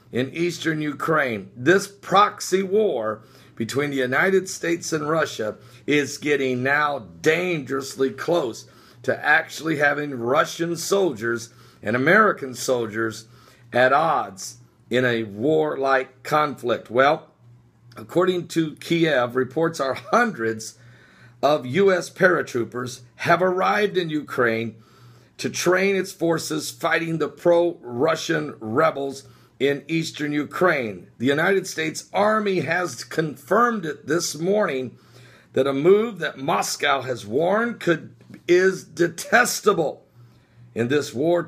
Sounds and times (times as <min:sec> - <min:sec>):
Speech: 0:00.1 - 0:17.3, 0:18.0 - 0:20.8, 0:21.4 - 0:24.8, 0:25.4 - 0:40.0, 0:40.8 - 0:41.4.